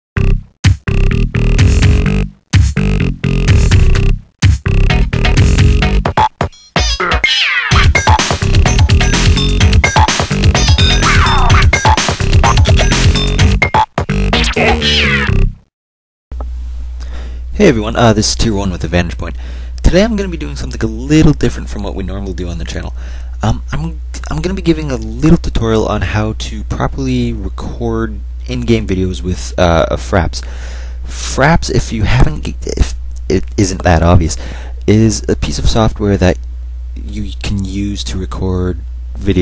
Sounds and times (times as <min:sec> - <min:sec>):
Sampler: 0:03.0 - 0:15.4.